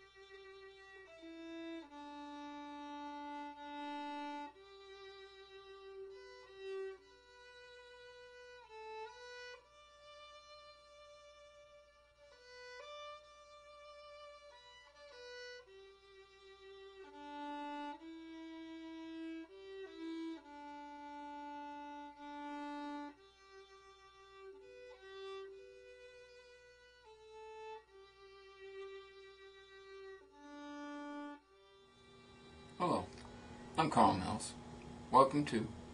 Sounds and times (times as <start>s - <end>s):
Violin, fiddle: 0.0s - 34.4s.